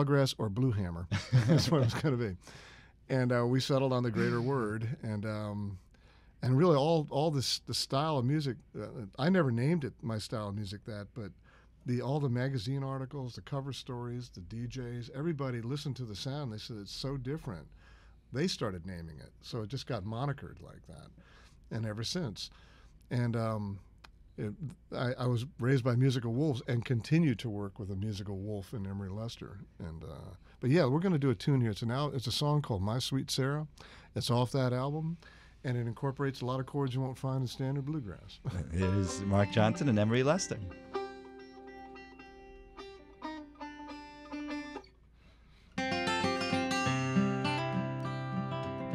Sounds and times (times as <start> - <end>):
Speech: 0.0 - 2.4, 3.1 - 5.8, 6.4 - 17.7, 18.3 - 22.5, 23.1 - 40.7.